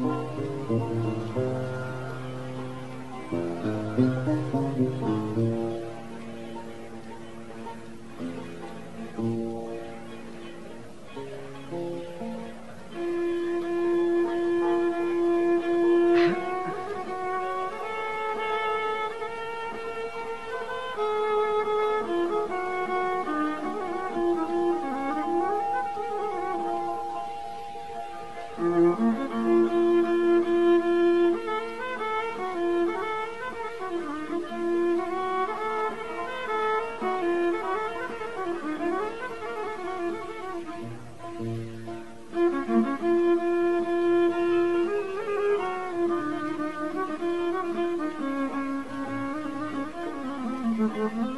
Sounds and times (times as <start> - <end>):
Music: 0.0 - 51.3.